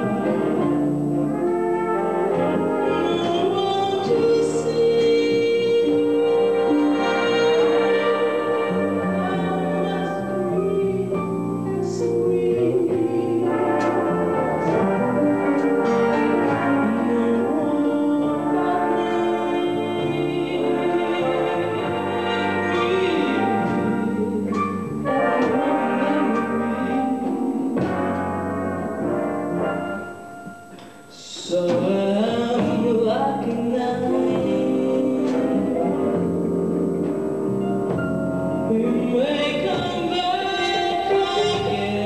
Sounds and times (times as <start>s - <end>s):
Jazz: 0.0s - 42.0s.